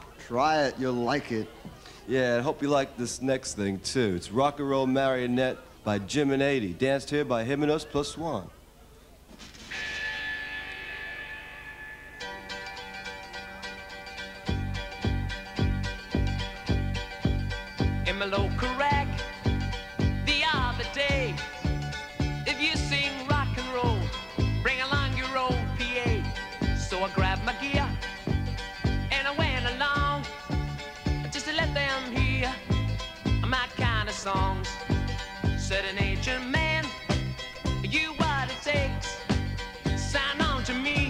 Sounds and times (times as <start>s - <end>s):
Rock and roll: 9.5s - 41.0s.